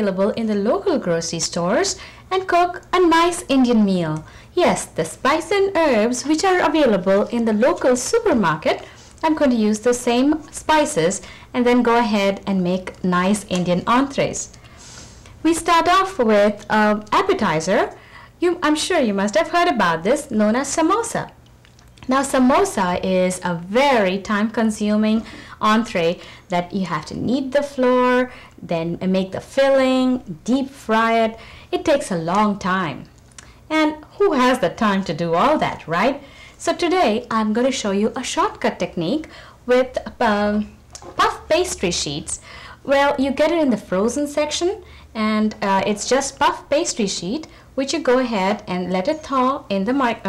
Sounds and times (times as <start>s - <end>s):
Speech: 0.0s - 14.5s, 15.4s - 21.4s, 22.0s - 33.1s, 33.7s - 50.2s.